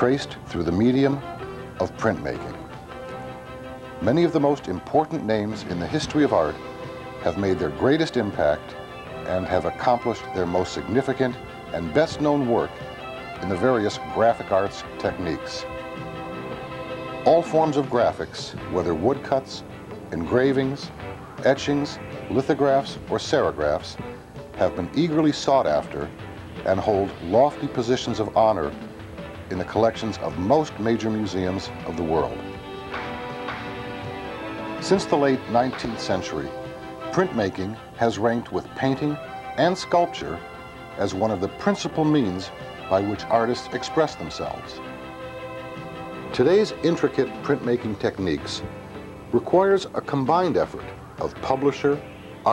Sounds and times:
Speech: 0.0 - 1.2, 1.8 - 2.6, 4.0 - 6.6, 7.2 - 12.8, 13.4 - 15.7, 17.3 - 24.0, 24.6 - 28.8, 29.5 - 32.4, 34.8 - 36.5, 37.1 - 40.4, 41.0 - 44.8, 46.4 - 48.7, 49.4 - 52.5
Music: 0.0 - 52.5.

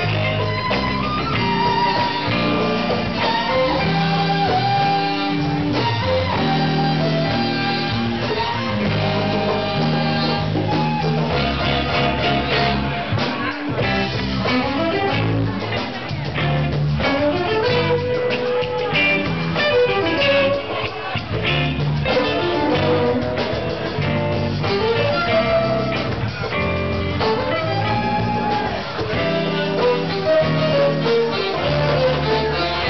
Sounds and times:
Music: 0.0 - 32.9
Speech: 11.9 - 23.1.

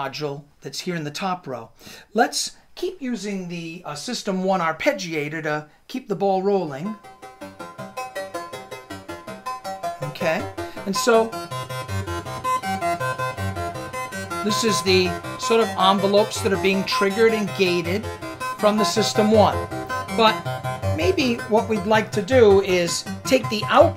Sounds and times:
Speech: 0.0 - 7.0, 10.0 - 11.4, 14.4 - 18.0, 18.6 - 19.6, 20.2 - 20.4, 21.0 - 23.9
Music: 6.7 - 23.9.

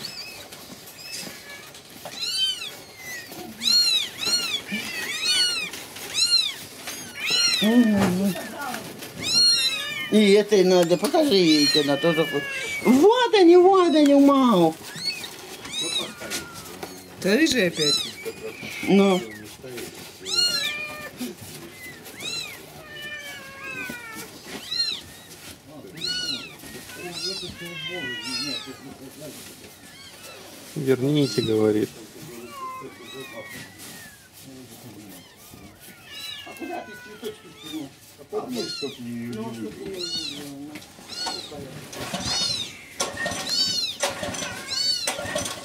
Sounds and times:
Meow: 0.0 - 13.1, 13.7 - 19.4, 20.2 - 29.1, 29.8 - 45.6.

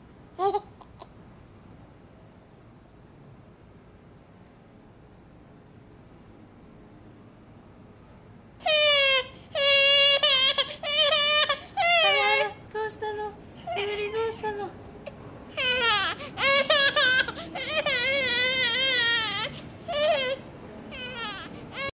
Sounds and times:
Baby cry, infant cry: 8.6 - 12.6, 15.5 - 21.9
Speech: 11.9 - 14.8.

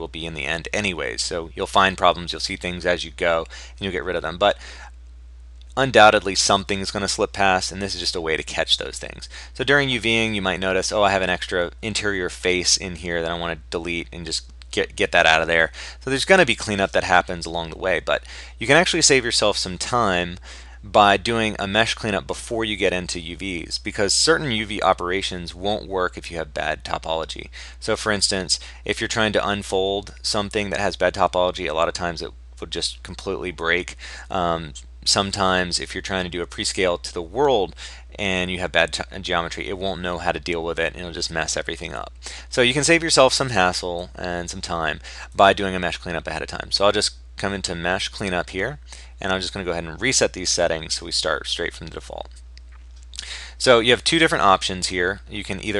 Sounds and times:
Speech: 0.0 - 4.6, 5.7 - 52.4, 53.2 - 55.8.

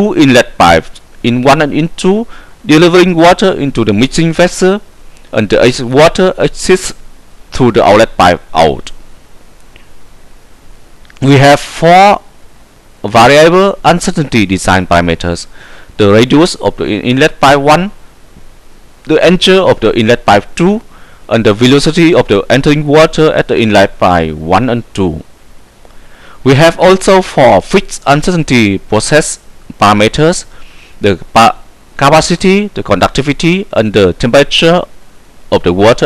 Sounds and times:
Hum: 0.0 - 36.0.

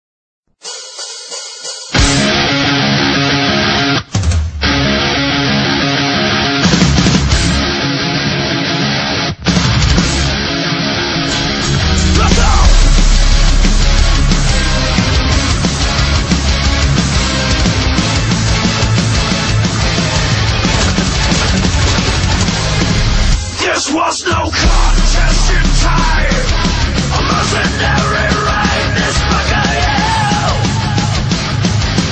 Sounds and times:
Drum roll: 0.6 - 2.6, 4.1 - 4.9, 11.3 - 32.1
Drum kit: 0.6 - 7.8, 9.4 - 32.1.

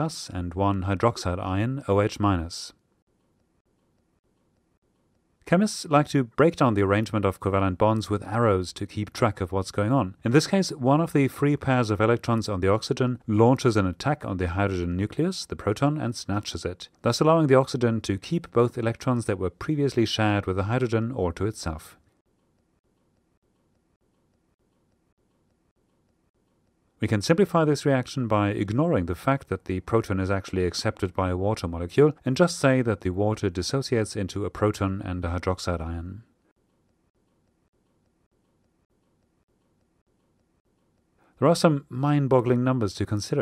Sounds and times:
Speech: 0.0 - 2.8, 5.5 - 22.0, 27.0 - 36.3, 41.4 - 43.4.

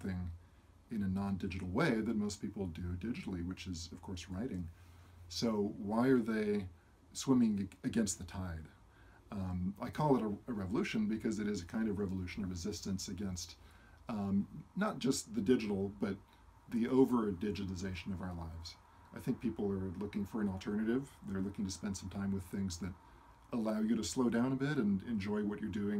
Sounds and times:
Speech: 0.0 - 25.9.

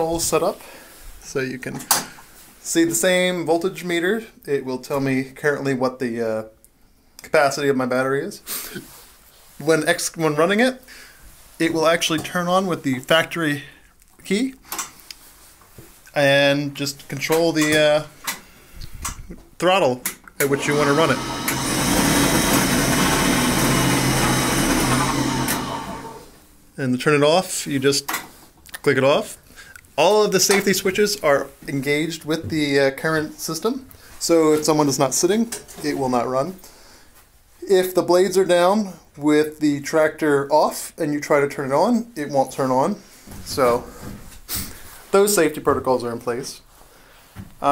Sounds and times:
Speech: 0.0 - 0.6, 1.2 - 1.9, 2.6 - 6.6, 7.2 - 8.5, 9.6 - 10.9, 11.6 - 14.6, 16.1 - 18.1, 19.6 - 21.2, 26.8 - 28.1, 28.7 - 29.4, 30.0 - 36.6, 37.6 - 44.0, 45.1 - 46.7
Inside, small room: 0.0 - 47.7.

